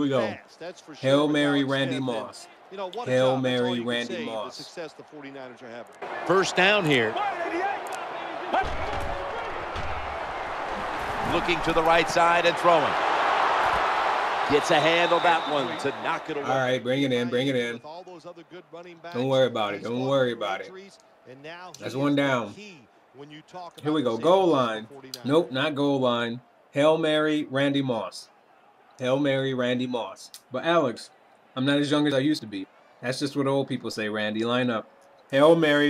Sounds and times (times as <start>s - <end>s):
Speech: 0.0s - 7.8s, 11.3s - 12.9s, 14.5s - 28.3s, 29.0s - 35.9s.